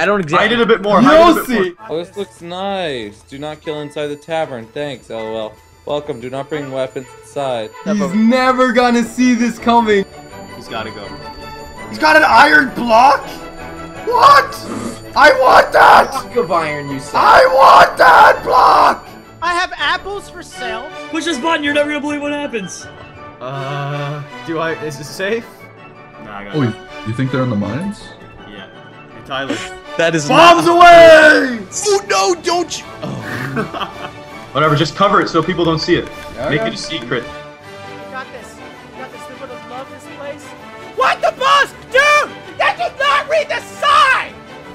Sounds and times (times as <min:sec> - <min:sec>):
Background music: 0:00.0 - 0:44.7.